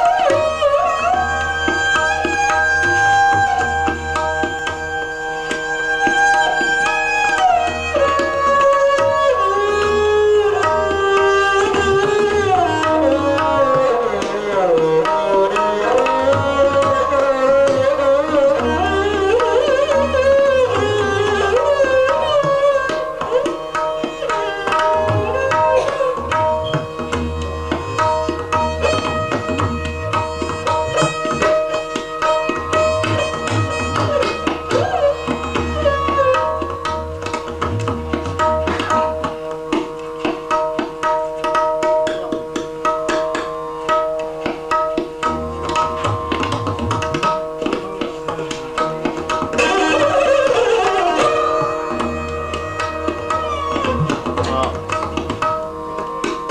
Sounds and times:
Tabla: 0:00.0 - 0:56.5.

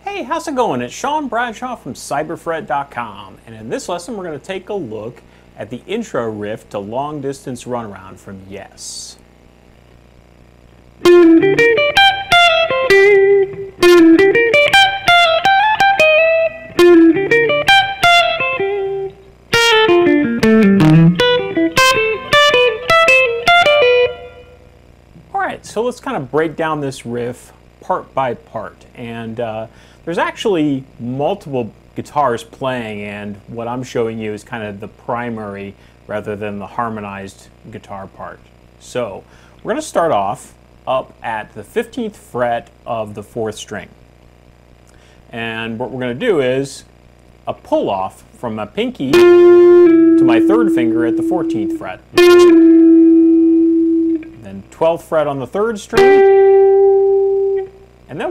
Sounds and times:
Speech: 0:00.0 - 0:09.2, 0:25.3 - 0:44.0, 0:45.3 - 0:49.2, 0:50.2 - 0:52.2, 0:54.4 - 0:56.0, 0:58.1 - 0:58.3
Strum: 0:11.0 - 0:24.6, 0:49.0 - 0:54.7, 0:56.0 - 0:58.3.

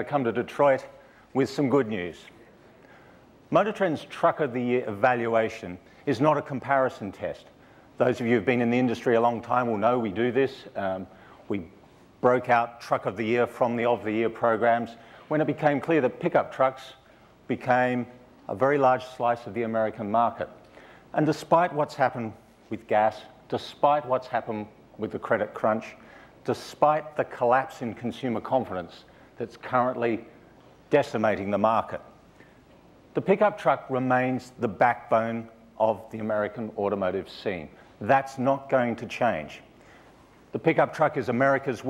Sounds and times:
Speech: 0:00.0 - 0:02.5, 0:03.5 - 0:32.2, 0:33.2 - 0:39.7, 0:40.5 - 0:41.9.

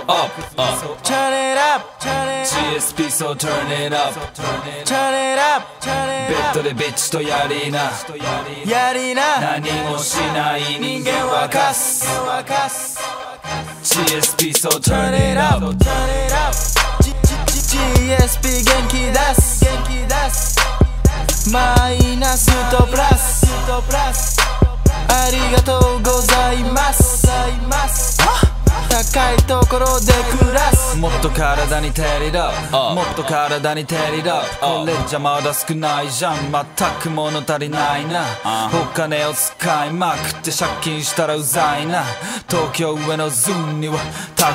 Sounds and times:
Music: 0:00.0 - 0:44.5.

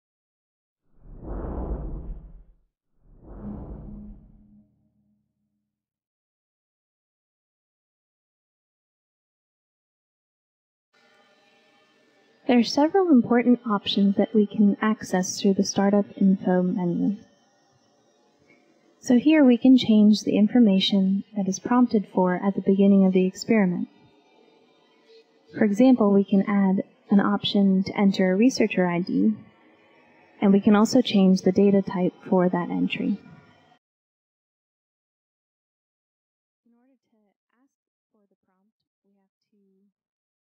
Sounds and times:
Speech: 0:12.5 - 0:17.2, 0:19.0 - 0:23.9, 0:25.6 - 0:29.4, 0:30.4 - 0:33.2, 0:36.7 - 0:39.9.

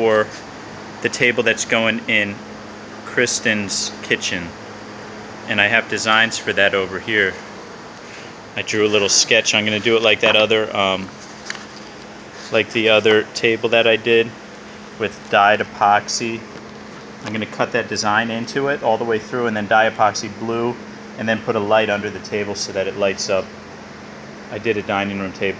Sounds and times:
Speech: 0:00.0 - 0:00.4, 0:01.0 - 0:02.4, 0:03.1 - 0:04.6, 0:05.5 - 0:07.4, 0:08.6 - 0:11.2, 0:12.5 - 0:14.4, 0:15.0 - 0:16.5, 0:17.2 - 0:23.5, 0:24.5 - 0:25.5.

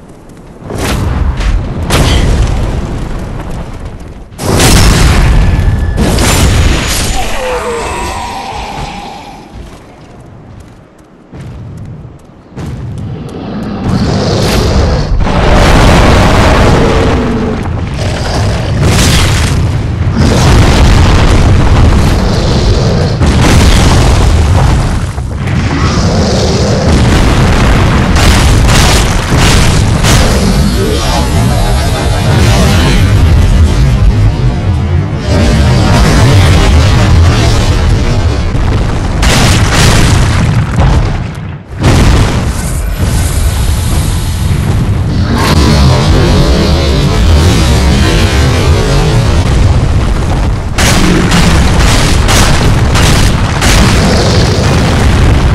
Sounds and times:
Boom: 0:00.6 - 0:09.7, 0:12.6 - 0:55.5.

